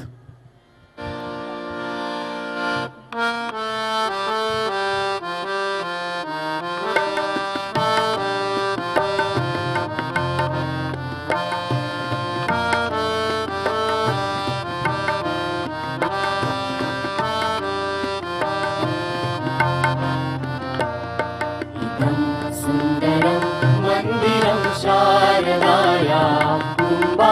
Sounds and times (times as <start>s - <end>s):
Traditional music: 0.9s - 27.3s.